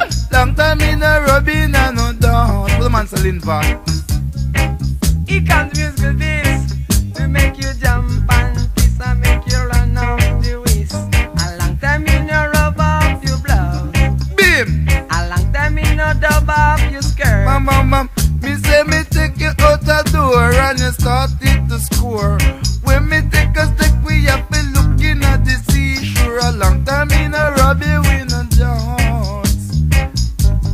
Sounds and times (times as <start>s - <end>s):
Reggae: 0.0s - 30.7s.